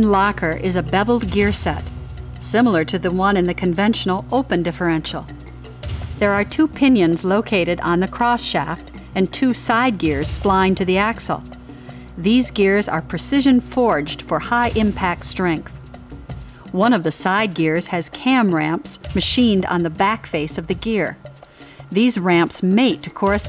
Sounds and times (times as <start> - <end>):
Speech: 0.0 - 5.3, 6.2 - 11.4, 12.2 - 15.8, 16.8 - 21.2, 22.0 - 23.4
Music: 0.0 - 23.4.